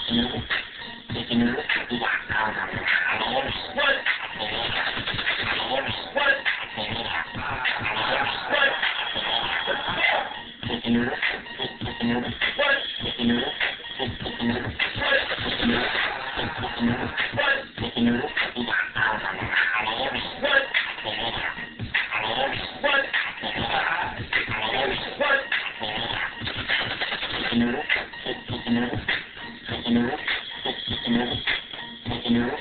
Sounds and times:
Music: 0.0s - 32.6s.

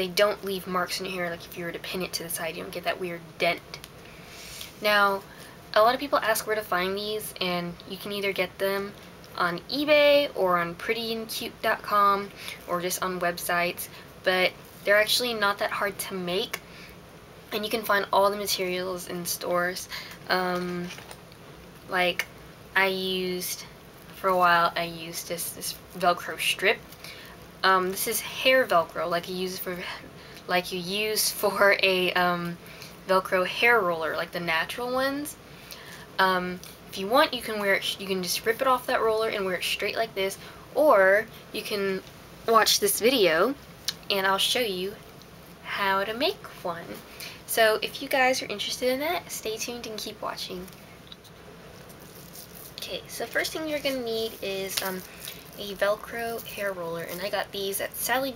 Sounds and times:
Speech: 0.0s - 3.8s, 4.8s - 16.6s, 17.5s - 21.0s, 21.9s - 22.2s, 22.8s - 26.8s, 27.6s - 35.4s, 36.2s - 45.0s, 45.7s - 50.7s, 52.8s - 58.3s.

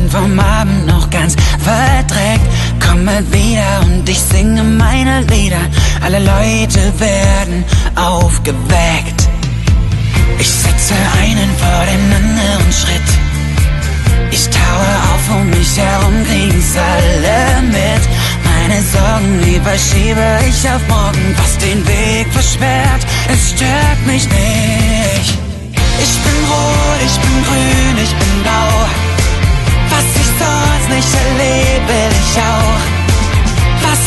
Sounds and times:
Music: 0.0s - 34.0s.

